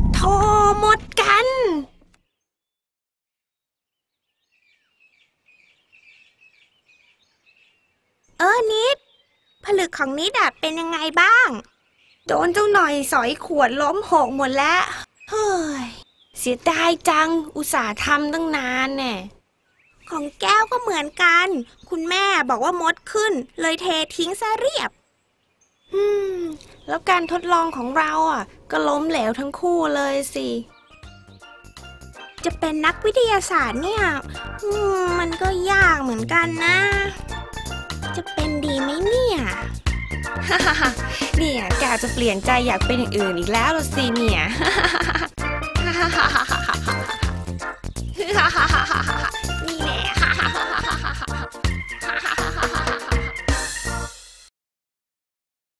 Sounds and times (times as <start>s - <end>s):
Child speech, kid speaking: 0.2s - 1.9s, 8.4s - 9.0s, 9.7s - 11.6s, 12.3s - 19.3s, 20.1s - 24.9s, 26.0s - 30.7s, 32.5s - 37.2s, 38.1s - 39.7s, 41.4s - 44.5s, 49.6s - 50.1s.